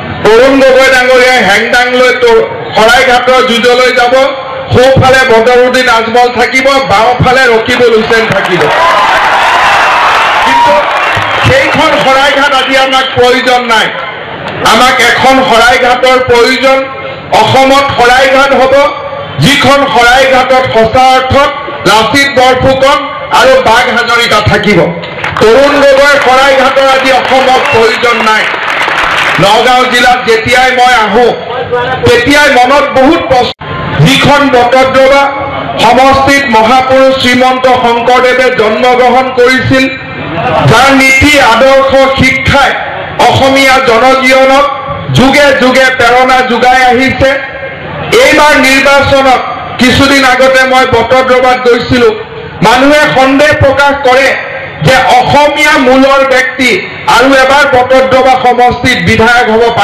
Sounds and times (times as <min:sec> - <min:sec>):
Male speech, man speaking: 0:00.2 - 0:08.7, 0:10.5 - 0:28.6, 0:29.4 - 0:47.5, 0:48.1 - 0:59.8.